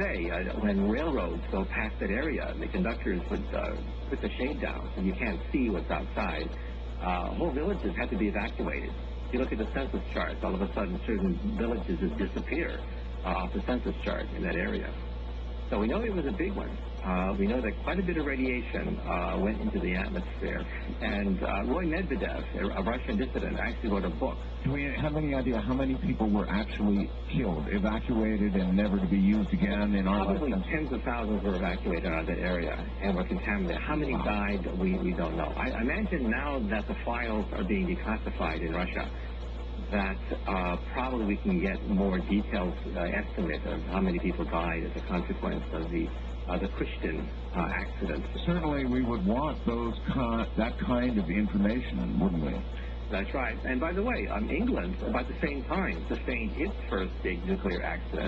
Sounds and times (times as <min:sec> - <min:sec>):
Speech: 0:00.0 - 0:15.1, 0:15.7 - 0:58.2.